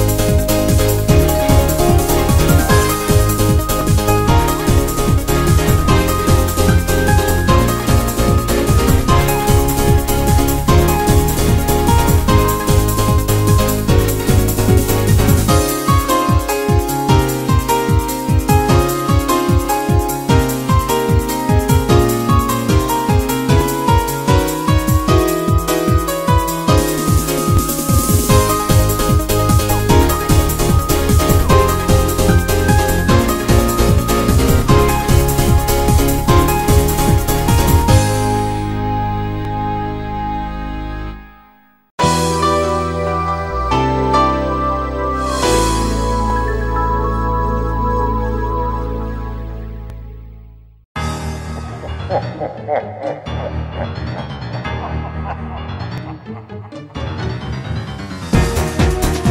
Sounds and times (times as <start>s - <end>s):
Disco: 0.0s - 38.5s
Dance music: 0.0s - 50.2s, 51.7s - 59.3s.